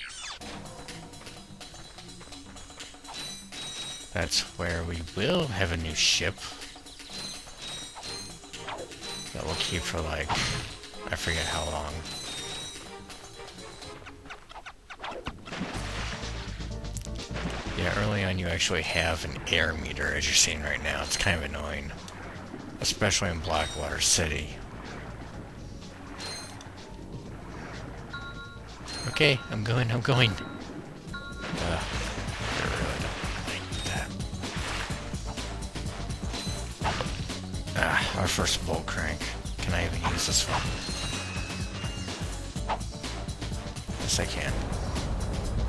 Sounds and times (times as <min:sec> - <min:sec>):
Music: 0:00.2 - 0:45.6
Speech: 0:04.2 - 0:06.6, 0:09.4 - 0:10.4, 0:11.1 - 0:12.0, 0:17.8 - 0:22.0, 0:22.8 - 0:24.6, 0:29.1 - 0:30.4, 0:37.8 - 0:40.7, 0:44.0 - 0:44.6.